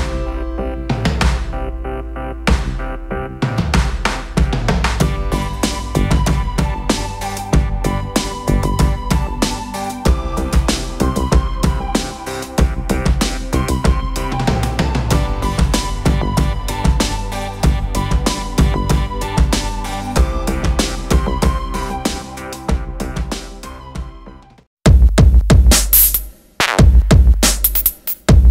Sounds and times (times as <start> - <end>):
Music: 0.0 - 28.5.